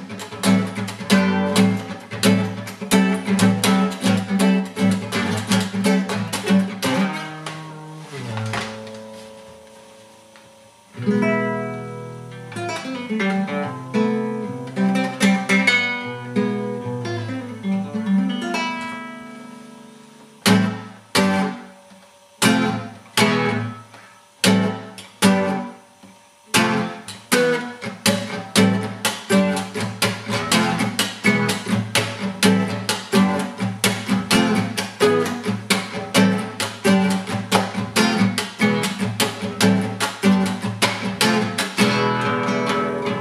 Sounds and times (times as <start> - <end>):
Acoustic guitar: 0.0 - 43.2.